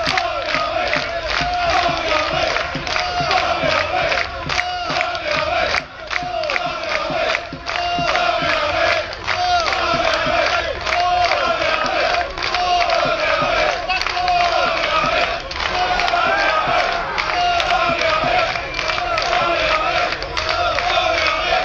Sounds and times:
Singing: 0.0s - 21.6s.

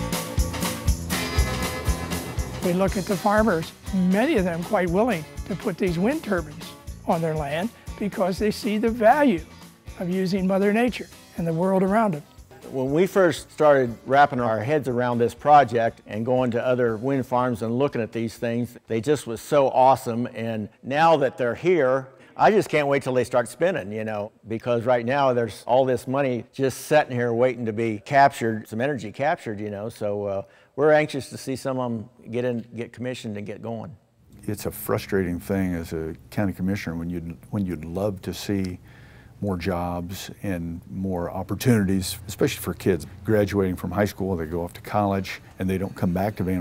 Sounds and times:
Music: 0.0s - 18.4s, 34.4s - 36.9s, 41.3s - 46.6s
Speech: 2.6s - 9.4s, 10.0s - 38.8s, 39.4s - 46.6s.

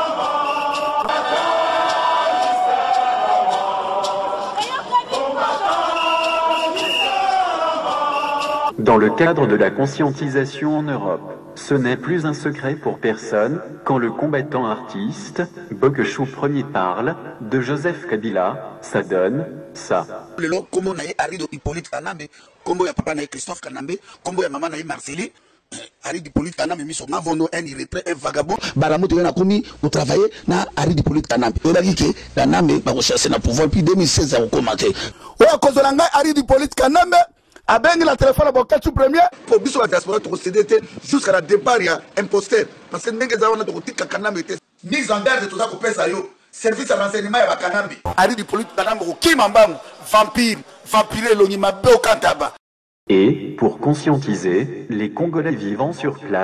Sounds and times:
Speech: 8.8s - 56.4s.

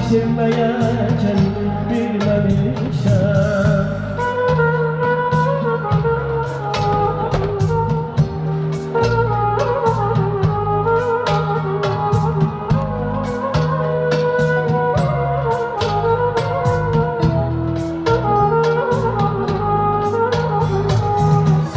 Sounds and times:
Wedding music: 0.0s - 21.7s.

